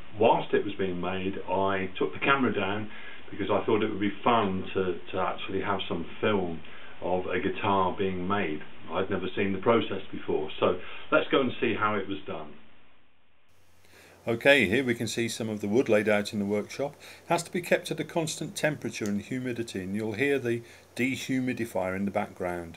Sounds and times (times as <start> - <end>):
Speech: 0.1 - 12.6, 14.3 - 22.7.